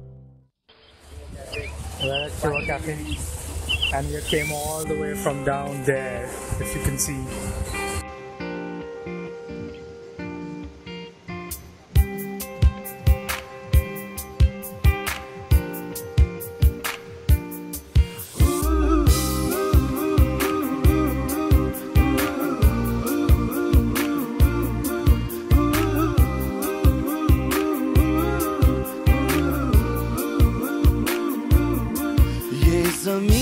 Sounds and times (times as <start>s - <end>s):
Music: 0.0s - 0.6s, 3.9s - 33.4s
Speech: 1.2s - 3.2s, 3.9s - 7.4s.